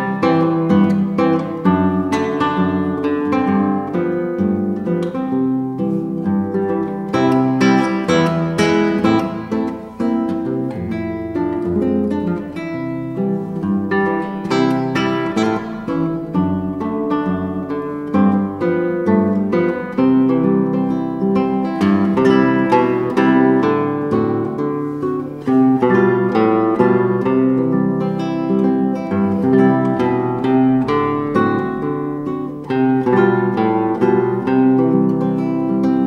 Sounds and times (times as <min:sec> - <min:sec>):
Acoustic guitar: 0:00.0 - 0:36.0
Strum: 0:00.0 - 0:36.0.